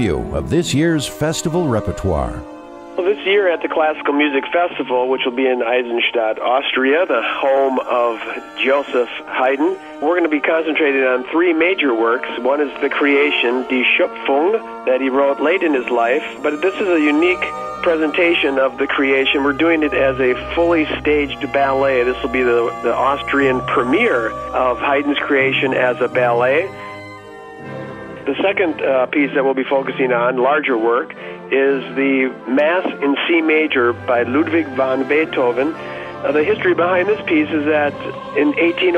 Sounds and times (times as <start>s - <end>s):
Classical music: 0.0s - 5.8s, 6.4s - 31.1s, 31.8s - 38.9s
Speech: 0.0s - 26.7s, 28.3s - 38.9s.